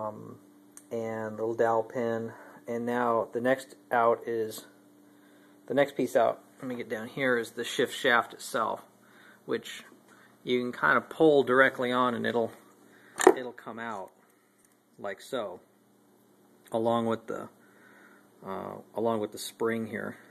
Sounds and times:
Speech: 0:00.0 - 0:04.8, 0:05.7 - 0:08.9, 0:09.5 - 0:12.6, 0:13.2 - 0:14.2, 0:15.0 - 0:15.6, 0:16.7 - 0:17.6, 0:18.4 - 0:20.3.

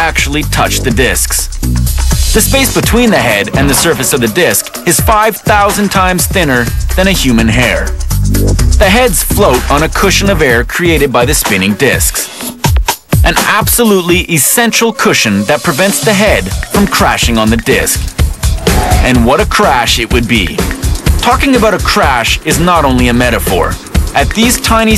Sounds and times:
Speech: 0:00.0 - 0:01.5, 0:02.4 - 0:08.0, 0:08.8 - 0:12.3, 0:13.2 - 0:18.1, 0:19.0 - 0:24.9
Music: 0:00.0 - 0:24.9.

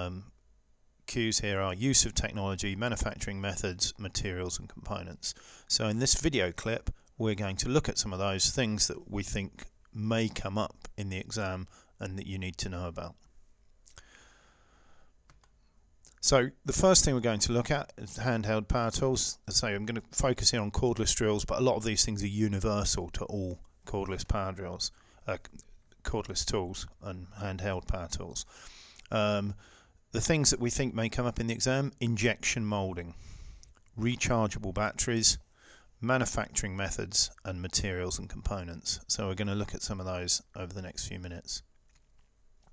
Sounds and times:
Speech: 0:00.0 - 0:00.4, 0:01.1 - 0:13.2, 0:16.1 - 0:28.5, 0:29.1 - 0:33.2, 0:34.0 - 0:35.4, 0:36.0 - 0:41.7.

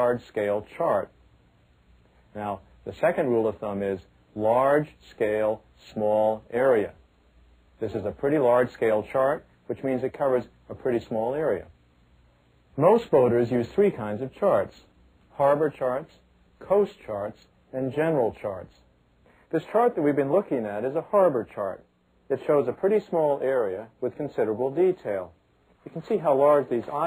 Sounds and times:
Speech: 0:00.0 - 0:01.2, 0:02.3 - 0:07.0, 0:07.8 - 0:11.8, 0:12.8 - 0:18.9, 0:19.5 - 0:27.0.

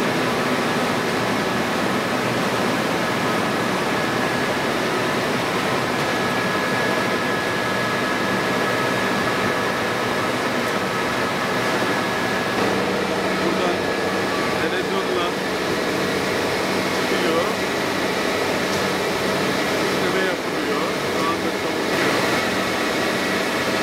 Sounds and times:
Inside, large room or hall: 0:00.0 - 0:23.8
Speech: 0:13.4 - 0:15.5, 0:17.0 - 0:17.6, 0:19.9 - 0:21.9.

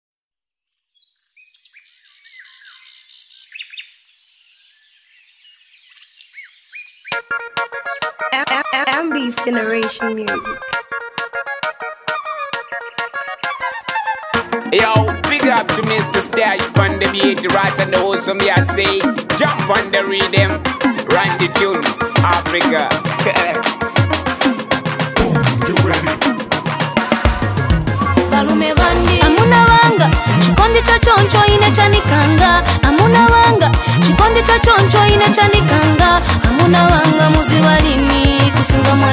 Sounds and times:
Chirp, tweet: 0:00.9 - 0:07.5.

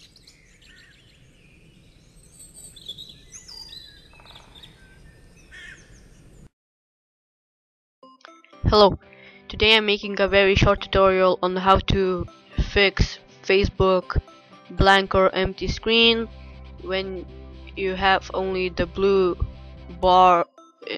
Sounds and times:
Bird vocalization, bird call, bird song: 0:00.0 - 0:06.5
Outside, rural or natural: 0:00.0 - 0:06.5, 0:15.0 - 0:20.9
Music: 0:08.0 - 0:20.9
Speech: 0:08.7 - 0:17.2, 0:17.8 - 0:20.9.

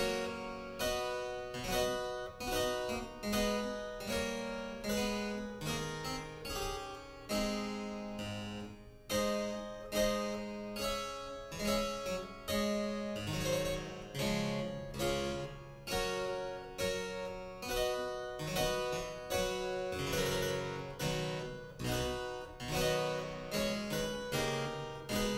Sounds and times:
Piano: 0:00.0 - 0:25.3.

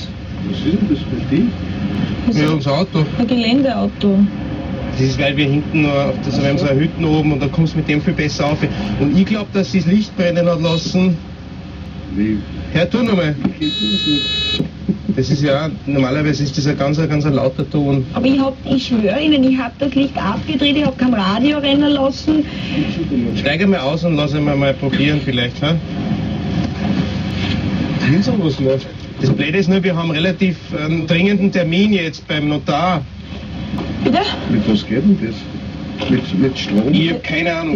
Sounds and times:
Speech: 0:00.0 - 0:01.5, 0:02.3 - 0:04.2, 0:05.0 - 0:11.2, 0:22.8 - 0:25.8, 0:36.0 - 0:37.7.

